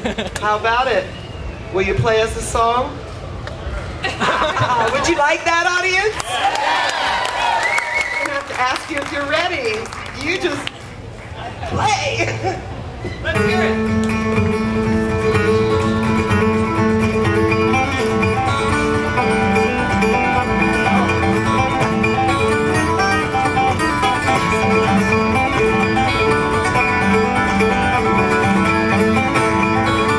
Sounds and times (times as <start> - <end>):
Acoustic guitar: 12.8 - 30.1.